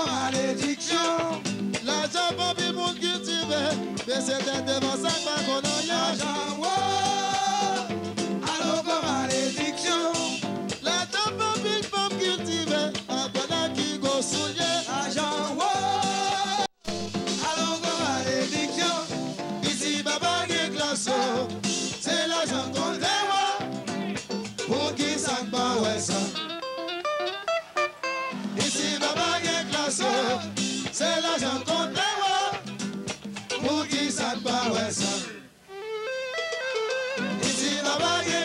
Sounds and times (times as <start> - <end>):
Ska: 0.0 - 38.4.